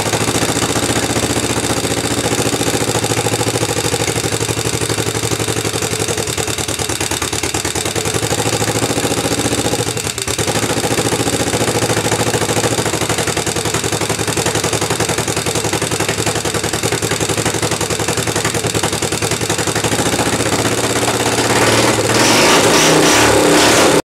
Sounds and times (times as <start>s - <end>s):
Heavy engine (low frequency): 0.0s - 24.0s
Accelerating, revving, vroom: 21.3s - 24.0s.